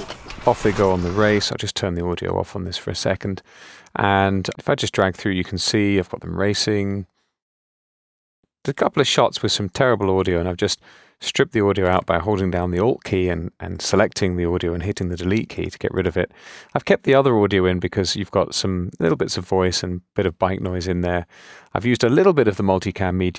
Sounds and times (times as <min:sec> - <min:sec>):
Speech: 0:00.4 - 0:07.1, 0:08.6 - 0:23.3.